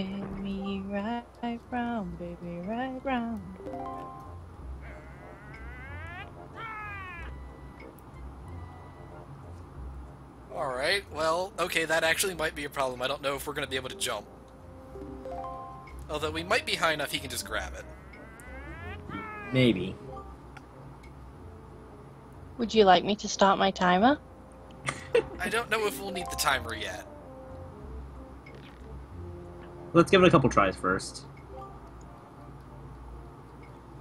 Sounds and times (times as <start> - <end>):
Speech: 10.6 - 14.2, 16.1 - 17.8, 25.4 - 27.0.